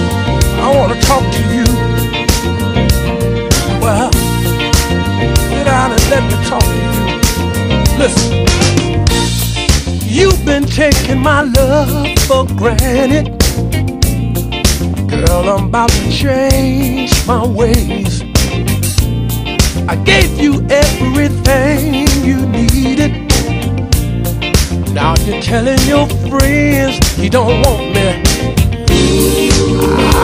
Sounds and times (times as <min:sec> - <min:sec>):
Music: 0:00.0 - 0:30.2.